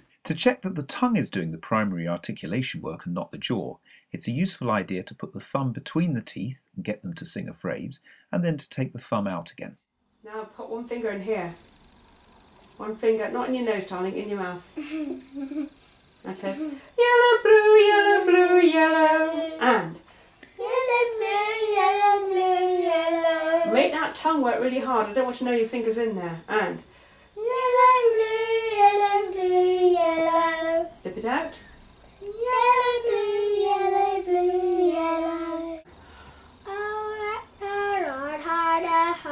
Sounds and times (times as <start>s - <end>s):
Inside, small room: 0.0s - 39.3s
Speech: 0.3s - 11.6s, 23.7s - 26.8s
Child singing: 17.0s - 19.7s, 20.6s - 23.9s, 27.4s - 31.0s, 32.2s - 35.9s, 36.7s - 39.3s.